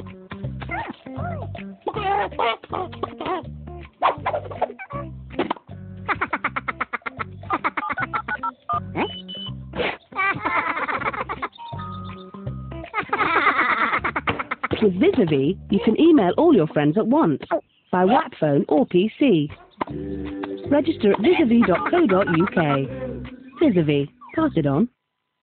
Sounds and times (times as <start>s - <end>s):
Music: 0.0s - 17.3s, 18.8s - 24.9s
Speech: 14.8s - 19.6s, 20.7s - 24.9s.